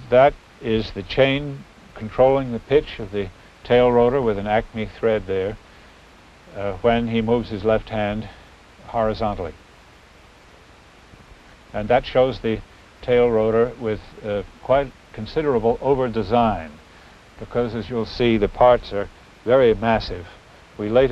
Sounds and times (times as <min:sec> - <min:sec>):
Speech: 0:00.0 - 0:05.6, 0:06.5 - 0:09.6, 0:11.7 - 0:16.8, 0:17.4 - 0:21.1.